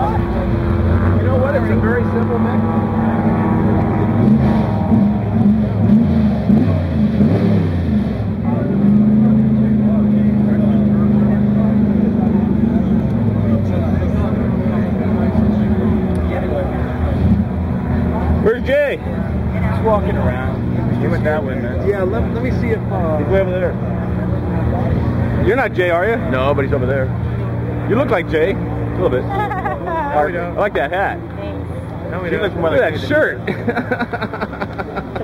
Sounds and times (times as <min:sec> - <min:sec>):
Car: 0:00.0 - 0:35.2.